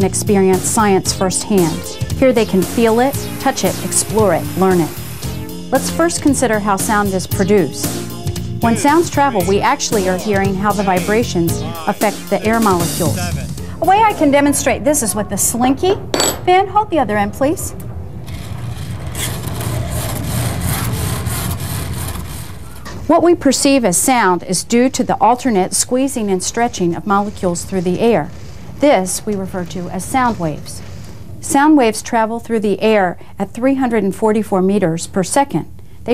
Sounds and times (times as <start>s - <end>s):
Speech: 0.0s - 4.9s, 8.6s - 17.8s, 23.1s - 30.8s, 31.4s - 36.1s
Music: 0.0s - 16.1s.